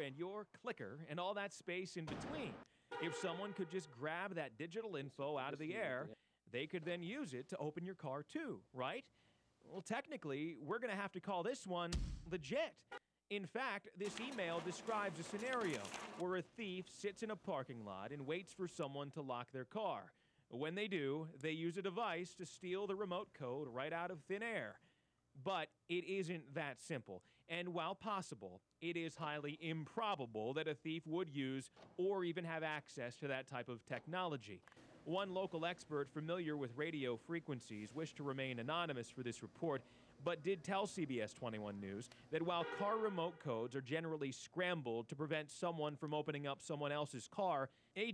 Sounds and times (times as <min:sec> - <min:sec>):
Speech: 0:00.0 - 0:24.8, 0:25.4 - 0:48.1.